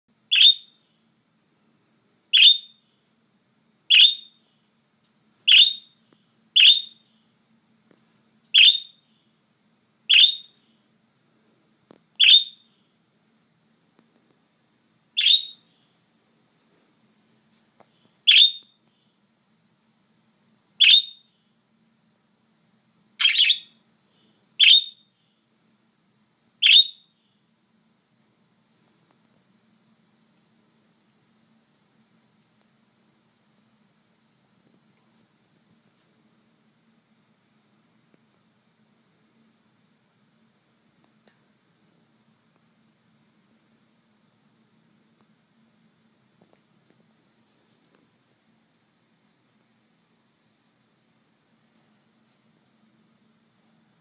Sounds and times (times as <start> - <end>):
Inside, small room: 0.1 - 54.0
Bird: 0.3 - 0.8, 2.3 - 2.8, 3.9 - 4.4, 5.5 - 6.0, 6.6 - 7.1, 8.6 - 9.0, 10.1 - 10.6, 12.2 - 12.7, 15.2 - 15.8, 18.3 - 18.8, 20.8 - 21.3, 23.2 - 25.1, 26.6 - 27.1.